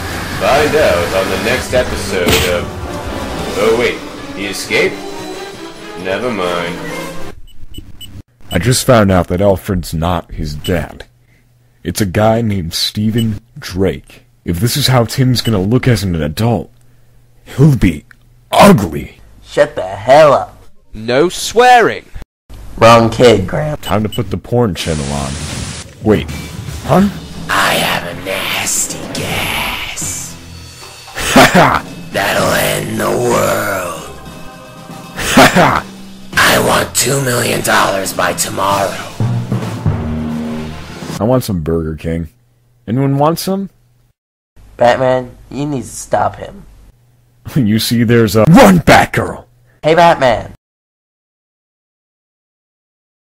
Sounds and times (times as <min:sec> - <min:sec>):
Music: 0:00.0 - 0:07.4, 0:26.2 - 0:41.2
Conversation: 0:00.4 - 0:07.3, 0:08.2 - 0:40.4, 0:41.2 - 0:50.6.